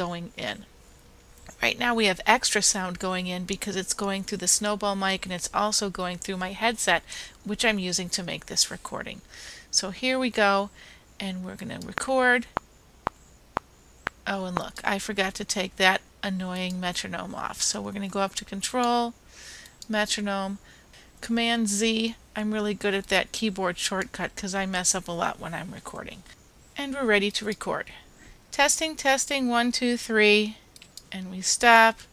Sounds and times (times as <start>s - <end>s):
Speech: 0.0s - 0.7s, 1.5s - 12.5s, 14.3s - 19.1s, 19.9s - 20.6s, 21.2s - 32.1s.